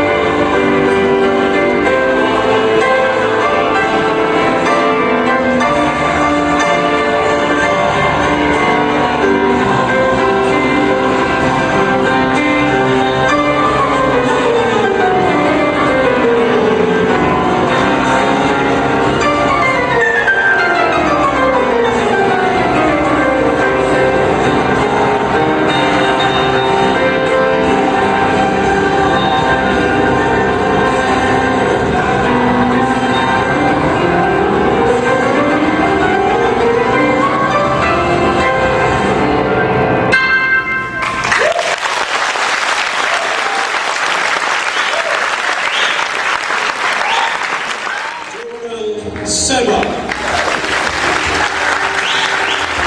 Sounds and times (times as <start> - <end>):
Applause: 41.0 - 48.5, 49.1 - 52.8.